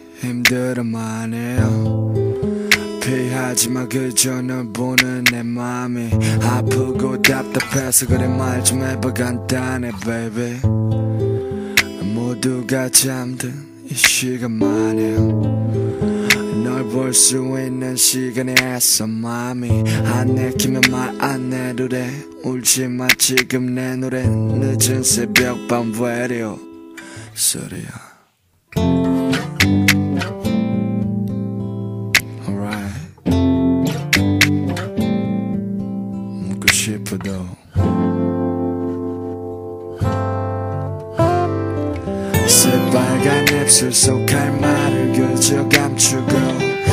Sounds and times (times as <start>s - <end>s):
Music: 0.0s - 27.7s, 28.7s - 46.9s.